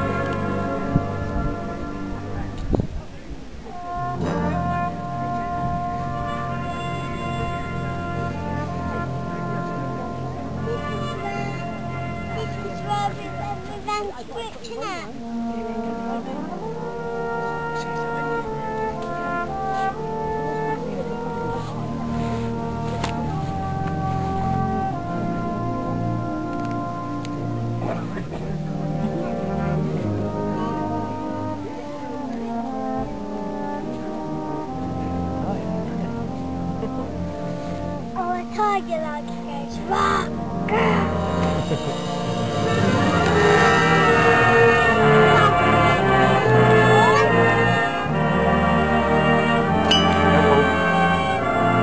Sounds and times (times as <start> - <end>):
French horn: 0.0 - 51.8.